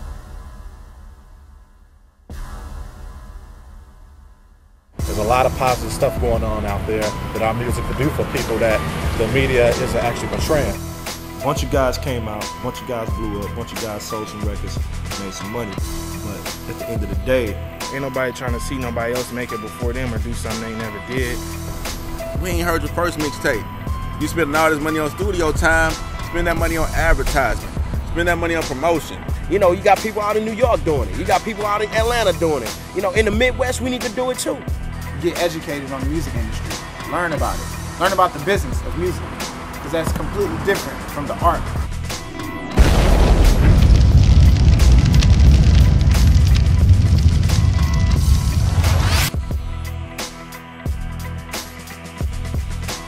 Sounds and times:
Music: 0.0s - 53.0s
Speech: 5.0s - 10.8s, 11.4s - 21.4s, 22.4s - 23.6s, 24.2s - 27.6s, 28.2s - 34.6s, 35.2s - 39.2s, 39.8s - 41.8s.

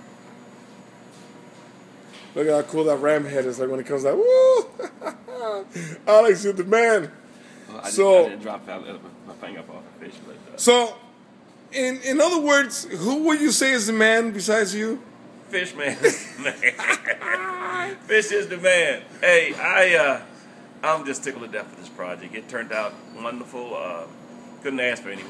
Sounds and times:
Inside, small room: 0.6s - 25.3s
Speech: 2.4s - 4.2s, 11.7s - 16.0s, 20.8s - 25.3s.

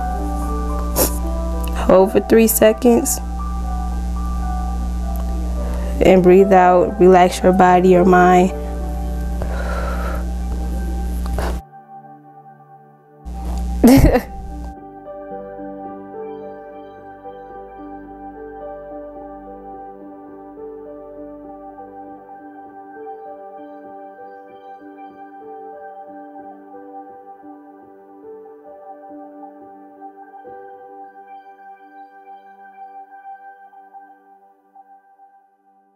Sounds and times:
New-age music: 0.0s - 35.9s.

